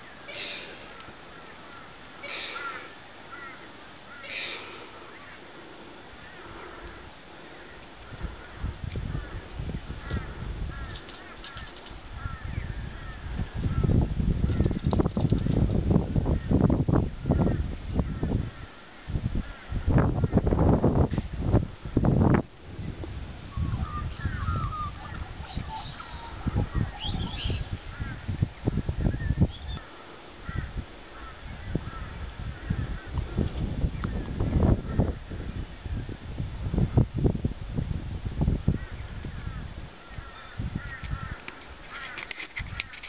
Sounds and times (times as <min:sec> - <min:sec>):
Outside, rural or natural: 0:00.0 - 0:43.0.